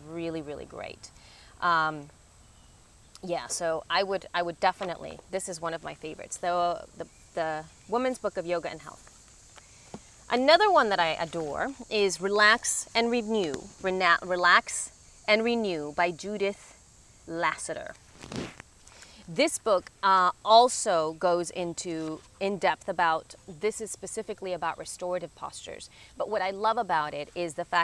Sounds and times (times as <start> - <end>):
Speech: 0.0 - 2.1, 3.2 - 9.0, 10.3 - 16.6, 17.3 - 18.0, 19.3 - 27.8
Outside, rural or natural: 0.0 - 27.8.